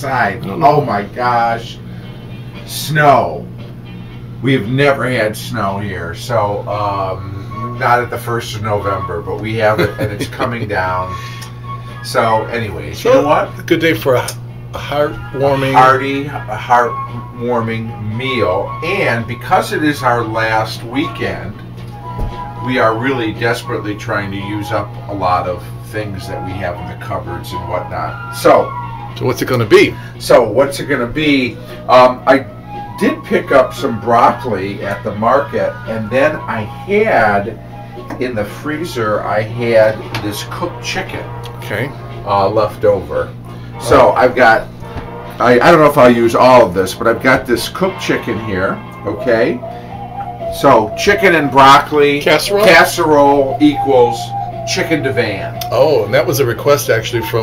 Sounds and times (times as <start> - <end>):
Speech: 0.0 - 1.8, 2.6 - 3.5, 4.4 - 11.2, 12.0 - 21.6, 22.6 - 37.6, 38.2 - 44.7, 45.4 - 49.6, 50.5 - 57.4
Music: 0.0 - 57.4.